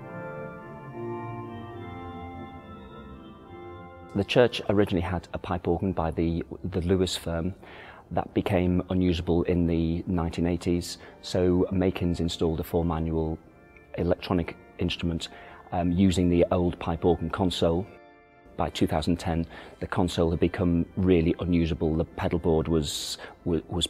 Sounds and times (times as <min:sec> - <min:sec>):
Keyboard (musical): 0:00.0 - 0:23.8
Speech: 0:04.1 - 0:17.9, 0:18.6 - 0:23.8.